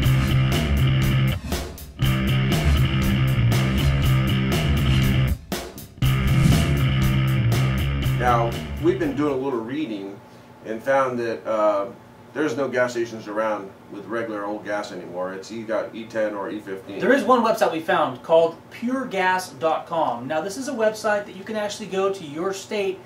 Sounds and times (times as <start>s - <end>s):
Speech: 8.2s - 23.0s.